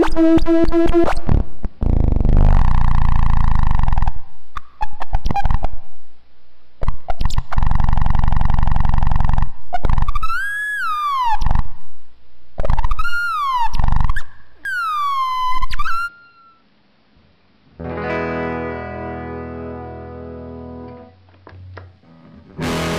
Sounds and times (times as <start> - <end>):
Distortion: 0.0 - 22.9
Effects unit: 0.0 - 22.9.